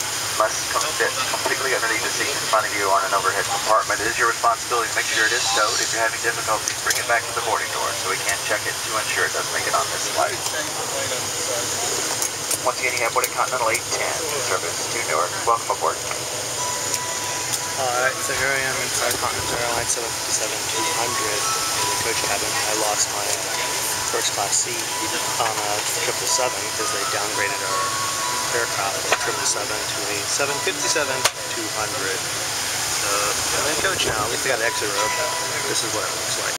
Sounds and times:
Speech: 0.4s - 16.1s, 17.8s - 32.3s, 33.0s - 36.5s
Music: 16.5s - 33.7s, 34.3s - 36.5s.

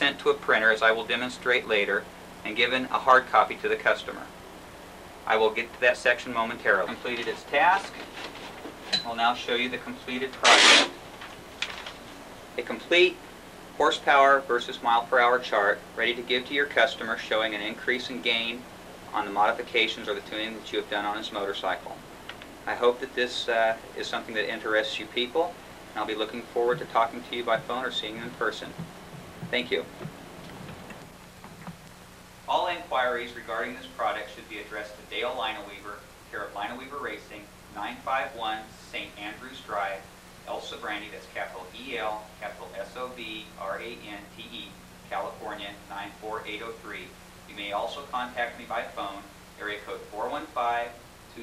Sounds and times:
Speech: 0.0s - 4.3s, 5.2s - 8.1s, 9.0s - 10.9s, 12.6s - 13.2s, 13.8s - 22.0s, 22.7s - 28.8s, 29.5s - 29.9s, 32.5s - 51.4s
Inside, small room: 0.0s - 51.4s.

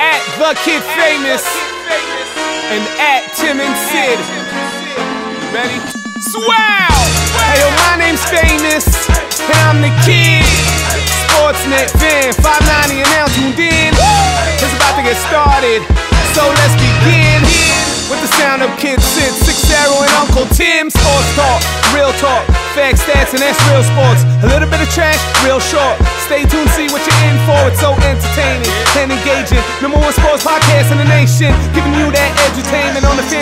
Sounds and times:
Music: 0.0s - 33.4s.

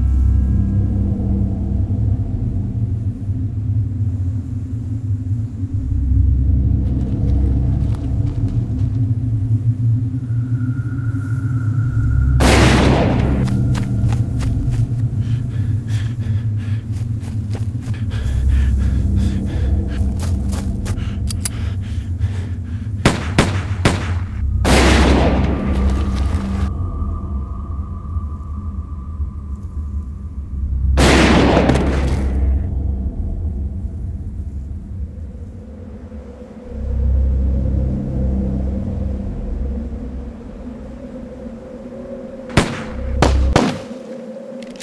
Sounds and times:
Gunshot, gunfire: 23.1s - 25.5s, 31.0s - 32.4s, 42.6s - 43.9s.

